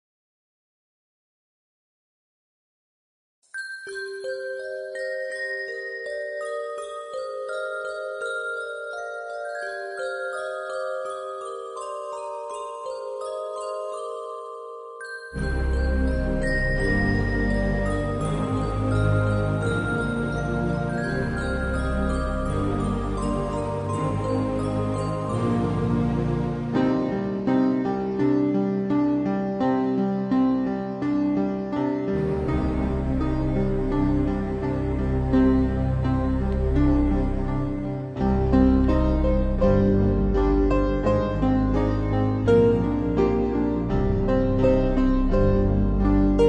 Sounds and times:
Music: 3.5s - 46.4s.

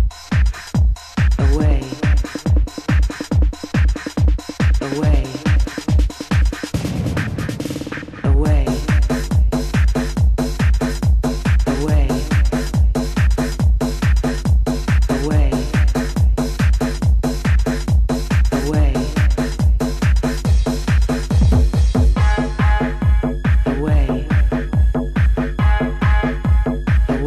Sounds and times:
Music: 0.0s - 27.2s.

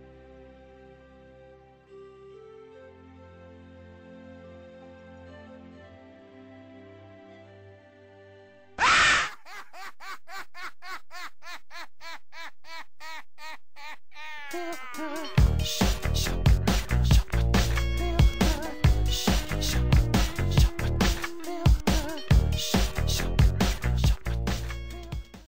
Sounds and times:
Music: 0.0s - 8.8s, 14.5s - 25.4s.

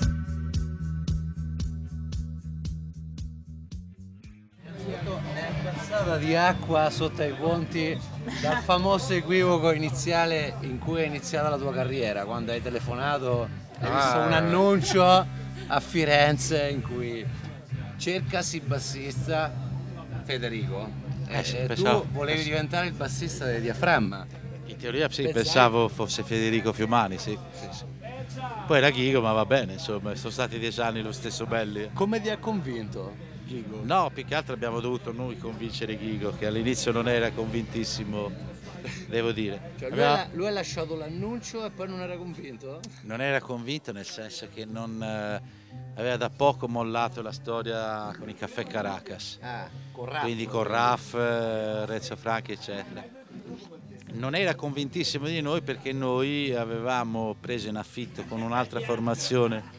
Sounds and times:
Music: 0.0s - 59.7s
Speech: 4.7s - 17.4s, 18.0s - 45.4s, 46.0s - 59.7s.

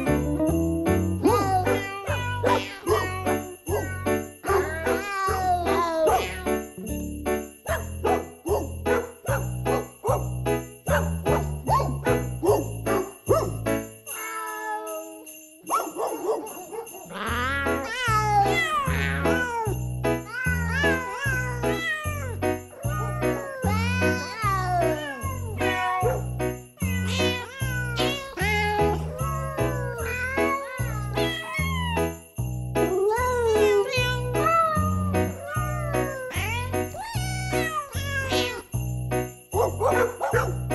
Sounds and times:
Music: 0.0s - 16.2s, 16.8s - 40.7s
Meow: 1.3s - 6.6s, 14.1s - 15.5s, 17.1s - 26.1s, 26.8s - 32.0s, 33.1s - 38.7s
Caterwaul: 1.7s - 3.9s, 4.7s - 6.6s, 14.1s - 15.3s, 17.1s - 26.0s, 26.8s - 32.0s, 33.9s - 38.6s.

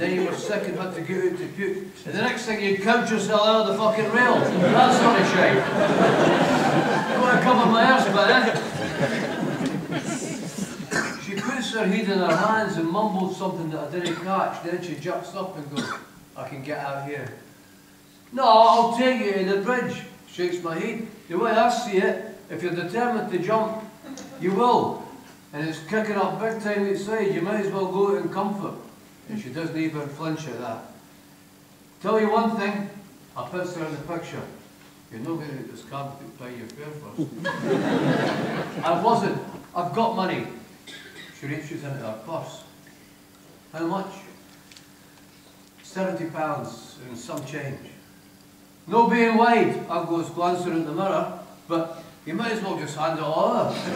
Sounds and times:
Speech: 0.0s - 5.7s, 7.1s - 8.7s, 11.2s - 17.4s, 18.3s - 31.0s, 32.0s - 37.3s, 38.8s - 40.6s, 41.4s - 42.8s, 43.7s - 44.4s, 45.8s - 48.0s, 48.9s - 53.9s
Laughter: 4.3s - 10.9s, 37.2s - 39.0s, 53.7s - 53.9s.

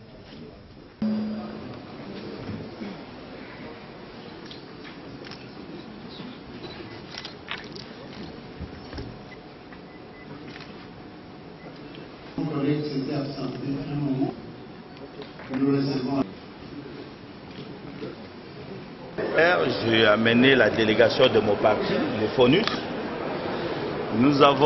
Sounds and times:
Speech: 12.4s - 14.4s, 24.1s - 24.6s.

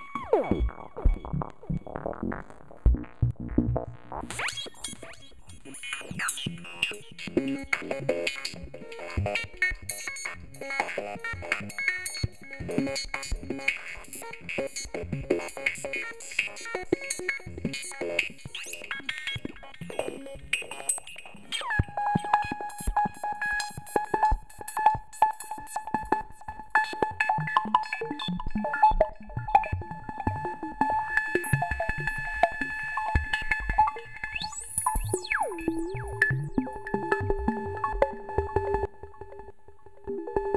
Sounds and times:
Synthesizer: 0.0s - 40.5s.

